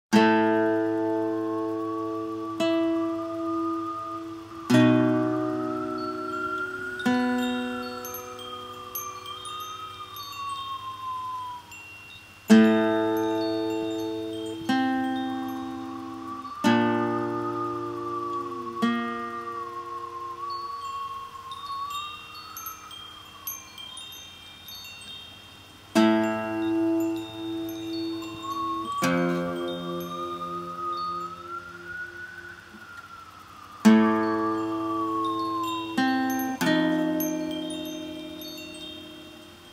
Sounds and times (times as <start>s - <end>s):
Acoustic guitar: 0.1s - 11.6s, 12.5s - 21.9s, 25.8s - 39.7s.